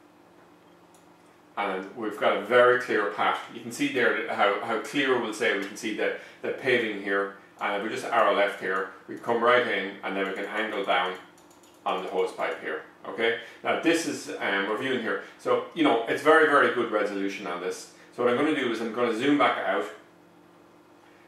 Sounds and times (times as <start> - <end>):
Speech: 1.6 - 11.2, 11.8 - 20.1.